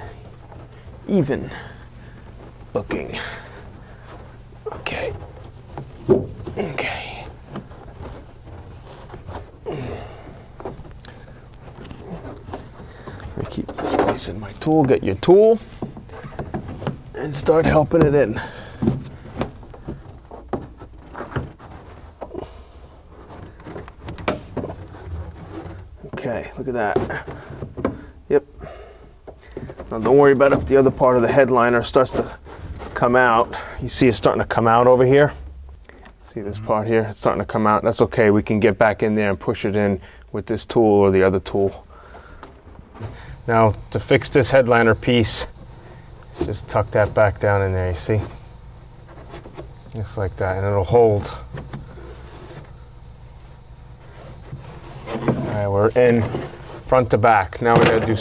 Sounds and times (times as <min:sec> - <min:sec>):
Speech: 0:01.1 - 0:01.6, 0:02.8 - 0:03.4, 0:04.7 - 0:05.2, 0:06.6 - 0:07.3, 0:13.4 - 0:15.7, 0:17.2 - 0:18.5, 0:26.0 - 0:27.3, 0:29.9 - 0:32.4, 0:33.0 - 0:35.4, 0:36.3 - 0:41.8, 0:43.5 - 0:45.6, 0:46.4 - 0:48.3, 0:50.0 - 0:51.5, 0:55.3 - 0:58.2.